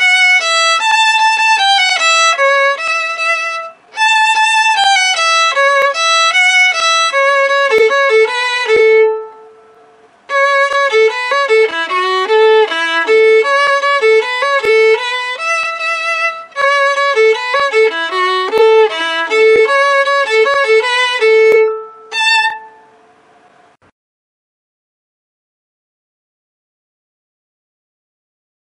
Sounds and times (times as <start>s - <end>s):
Violin, fiddle: 0.0s - 23.0s.